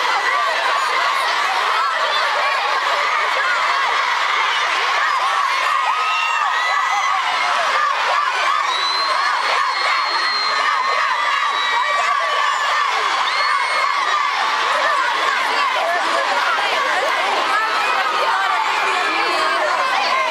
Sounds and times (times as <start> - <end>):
Speech: 0.0 - 20.3.